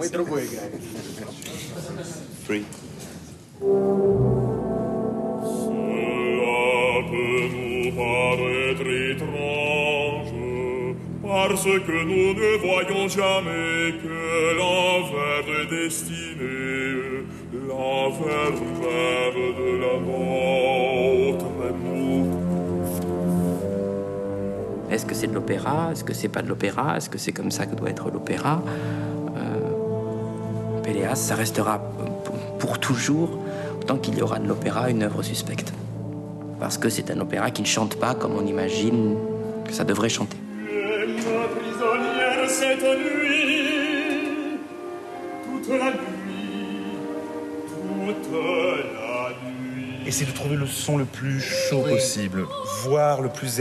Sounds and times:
Music: 0:03.4 - 0:53.6.

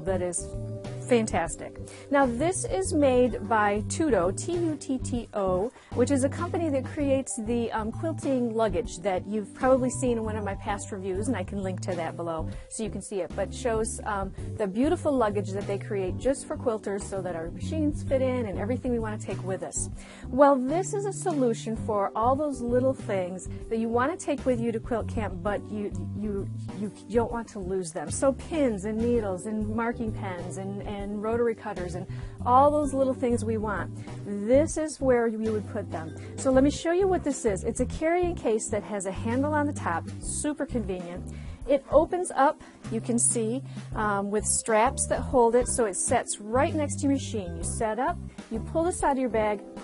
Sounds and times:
Music: 0:00.0 - 0:49.8
Speech: 0:00.0 - 0:49.8.

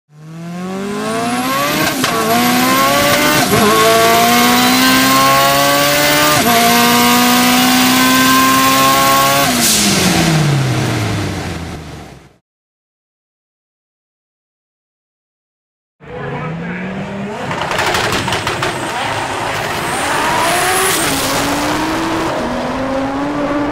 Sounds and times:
Race car, auto racing: 0:00.1 - 0:12.4, 0:16.0 - 0:23.7.

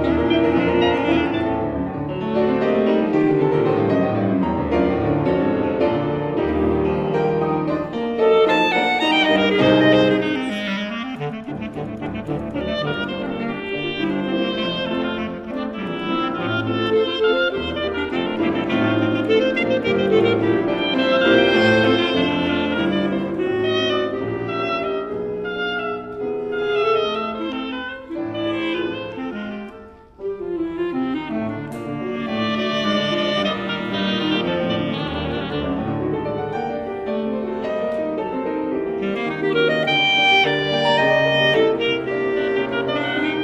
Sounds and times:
Musical instrument: 0:00.0 - 0:43.4.

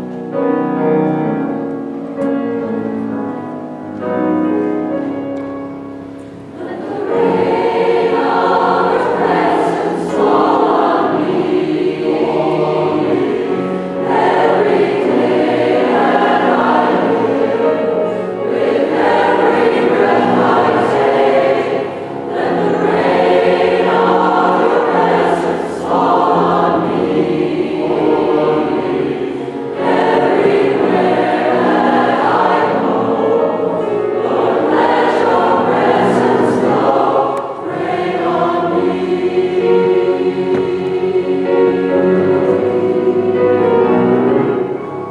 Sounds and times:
Music: 0:00.0 - 0:45.1.

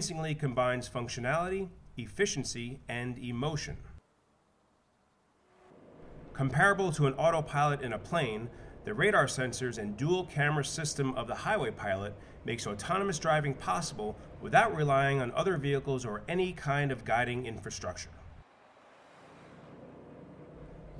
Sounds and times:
Speech: 0:00.0 - 0:04.0, 0:06.4 - 0:18.2
Vehicle: 0:05.1 - 0:20.9.

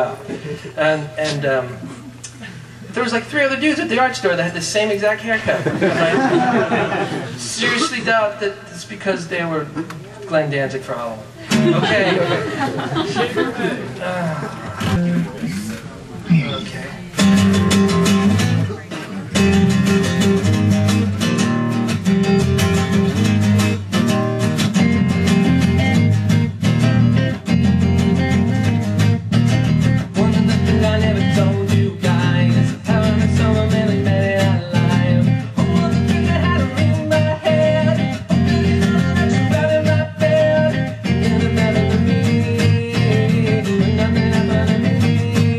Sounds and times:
Speech: 0:00.0 - 0:01.9, 0:02.9 - 0:05.7, 0:07.4 - 0:12.4, 0:13.3 - 0:17.2.

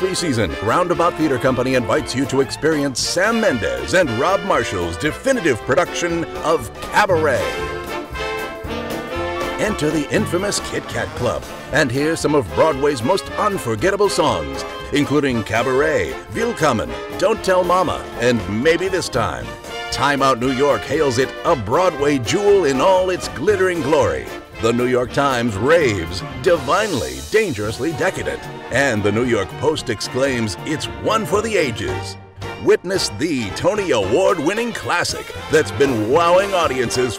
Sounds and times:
Speech: 0:00.0 - 0:07.7, 0:09.6 - 0:37.1
Music: 0:00.0 - 0:37.1.

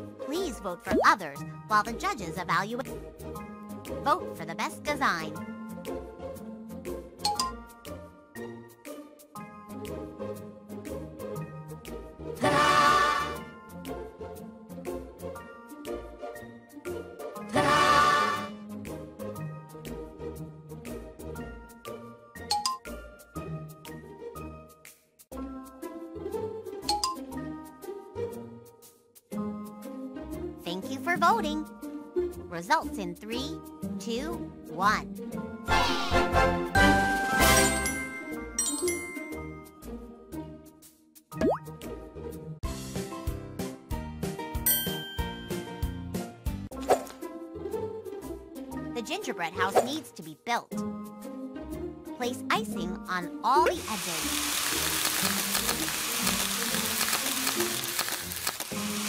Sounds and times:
Child speech, kid speaking: 0:00.3 - 0:02.9, 0:04.0 - 0:05.4, 0:30.7 - 0:31.7, 0:32.5 - 0:35.1, 0:49.0 - 0:50.8, 0:52.2 - 0:54.3.

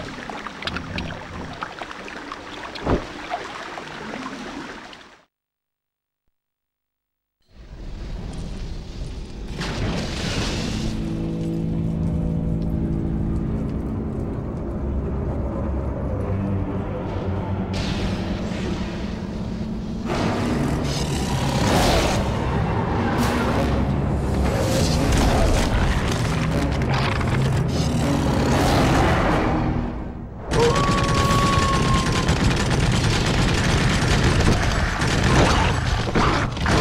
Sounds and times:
Music: 0:10.3 - 0:22.4, 0:23.1 - 0:31.6.

